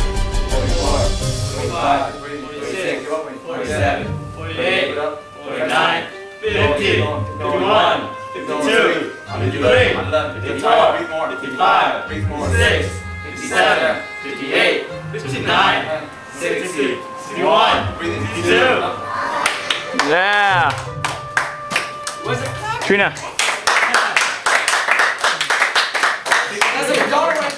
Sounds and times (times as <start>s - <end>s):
Music: 0.0s - 23.9s.